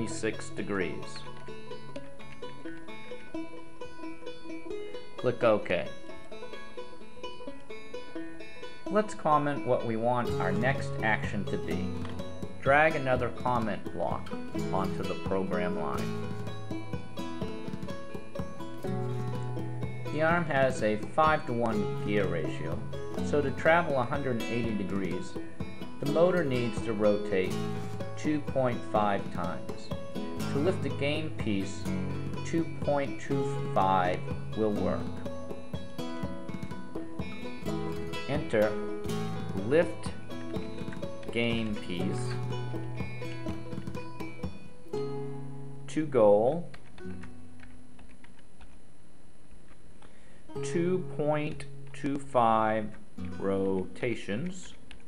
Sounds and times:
Speech: 0.0s - 1.2s, 5.2s - 5.9s, 8.9s - 11.9s, 12.6s - 16.1s, 20.1s - 25.4s, 26.0s - 27.6s, 28.2s - 29.9s, 30.5s - 35.1s, 38.3s - 38.8s, 39.6s - 40.2s, 41.3s - 42.4s, 45.9s - 46.7s, 50.6s - 54.8s.

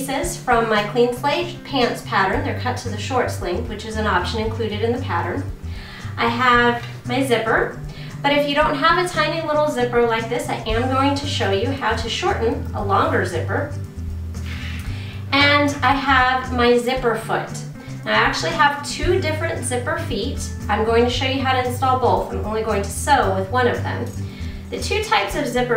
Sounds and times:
Speech: 0.0s - 5.5s, 6.1s - 13.7s, 15.3s - 24.1s, 24.7s - 25.7s
Music: 0.0s - 25.7s.

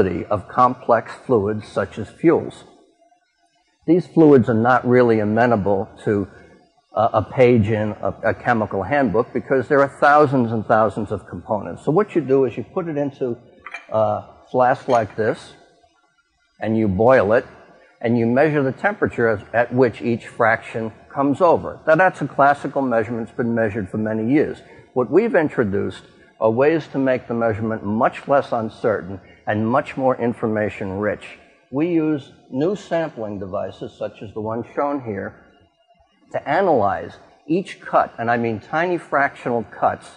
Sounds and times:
Speech: 0.0s - 2.6s, 3.9s - 6.4s, 7.0s - 15.6s, 16.6s - 35.4s, 36.4s - 40.1s.

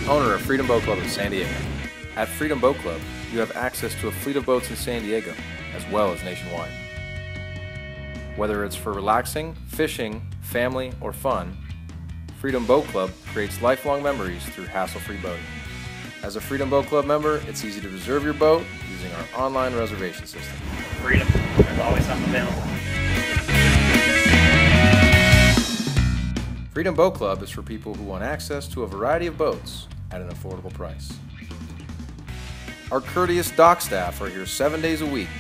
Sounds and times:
Speech: 0.0s - 1.6s, 2.2s - 6.8s, 8.4s - 11.6s, 12.4s - 15.4s, 16.2s - 22.8s, 26.8s - 31.2s, 32.9s - 35.4s
Music: 0.0s - 35.4s.

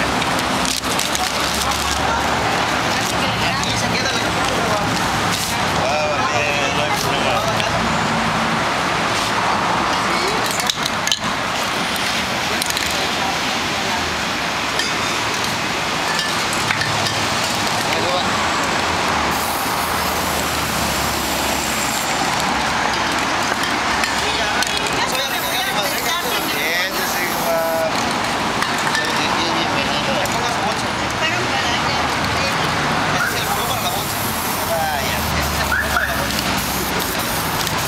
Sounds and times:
Speech: 1.1s - 7.9s, 24.2s - 28.0s, 28.8s - 37.4s
Spray: 4.9s - 5.7s, 19.3s - 22.4s, 24.7s - 27.9s, 33.2s - 37.8s.

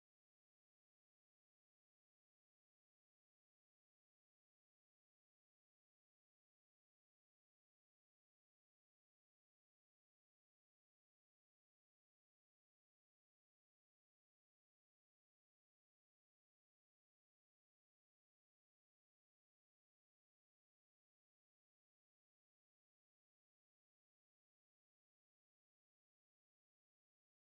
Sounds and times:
Silence: 0.0s - 27.4s.

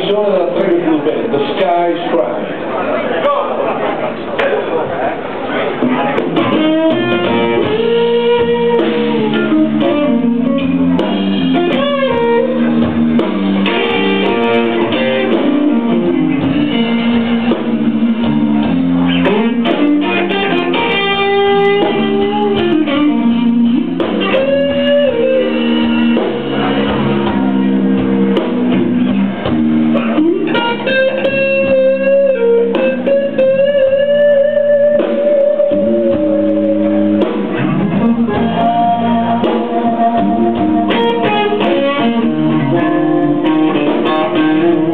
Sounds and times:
Blues: 0.0s - 44.9s.

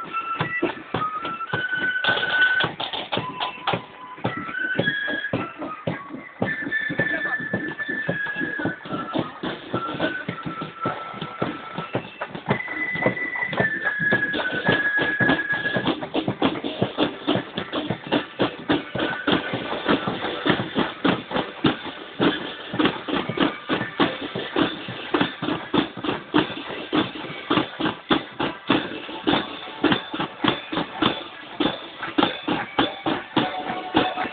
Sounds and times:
Music: 0.0s - 34.3s
Walk, footsteps: 0.0s - 34.3s
Speech: 7.0s - 7.6s.

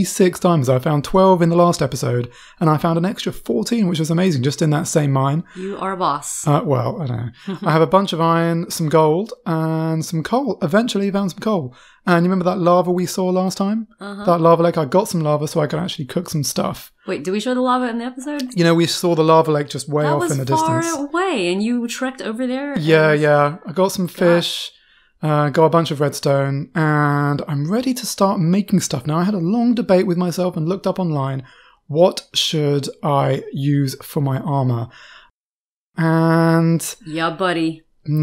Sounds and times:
Narration, monologue: 0.0s - 35.4s, 36.0s - 38.2s.

